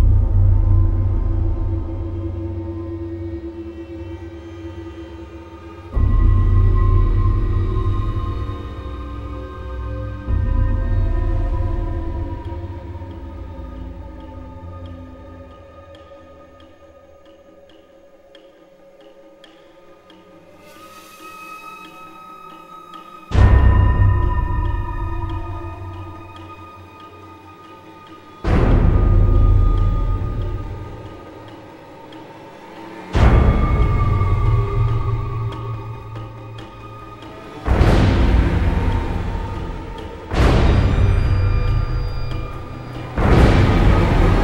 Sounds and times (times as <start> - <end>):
Music: 0.0 - 44.4.